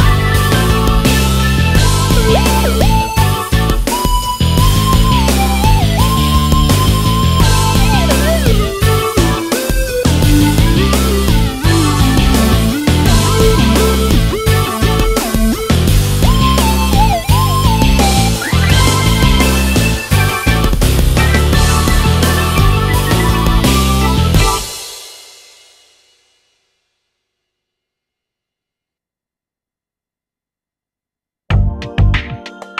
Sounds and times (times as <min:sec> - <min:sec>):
Synthesizer: 0:00.0 - 0:24.7, 0:31.5 - 0:32.8.